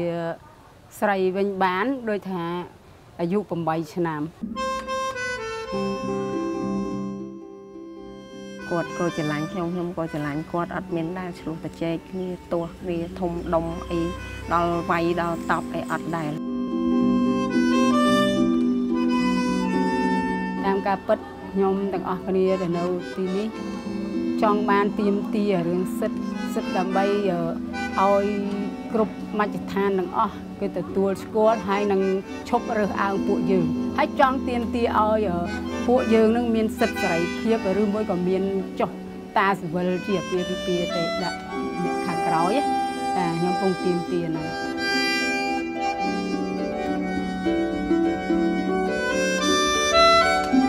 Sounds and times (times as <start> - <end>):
Speech: 0.0 - 4.3, 8.7 - 16.4, 20.6 - 23.5, 24.4 - 42.6, 43.2 - 44.6
Music: 4.4 - 50.6.